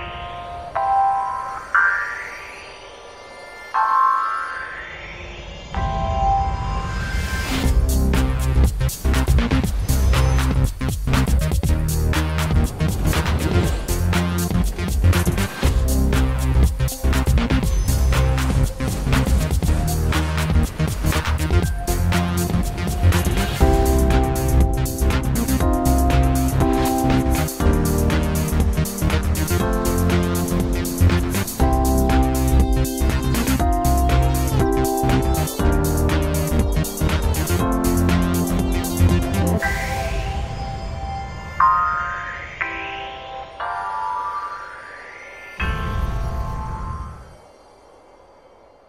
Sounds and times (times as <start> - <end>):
Music: 0.0 - 48.8.